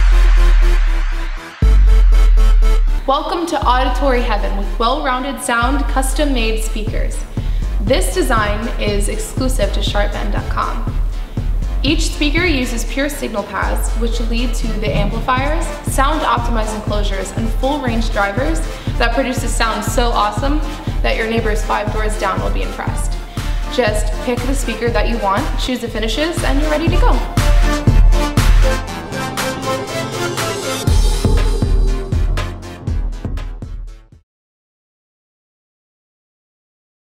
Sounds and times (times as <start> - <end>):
Music: 0.0 - 34.3
Speech: 3.1 - 10.9, 11.8 - 27.3.